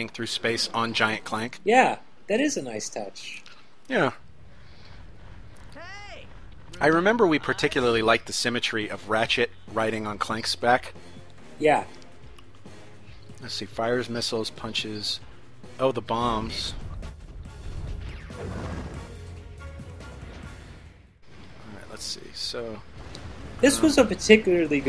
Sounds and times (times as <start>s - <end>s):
Speech: 5.8s - 10.9s, 15.8s - 16.8s, 23.6s - 24.8s
Music: 7.3s - 21.2s, 23.6s - 24.8s.